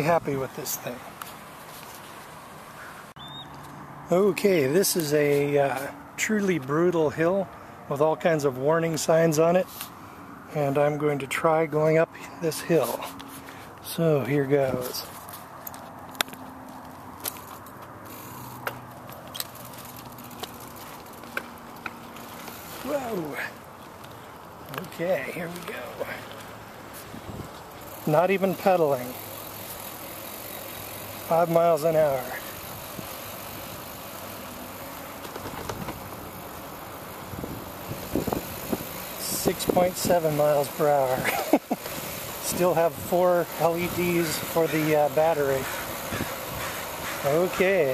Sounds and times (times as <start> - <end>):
Speech: 0.0 - 1.1, 4.1 - 9.7, 10.5 - 13.2, 13.8 - 15.1, 22.8 - 23.6, 24.7 - 26.3, 28.0 - 29.2, 31.3 - 32.5, 39.2 - 41.3, 42.4 - 45.7, 47.2 - 47.9
Bicycle: 0.0 - 47.9.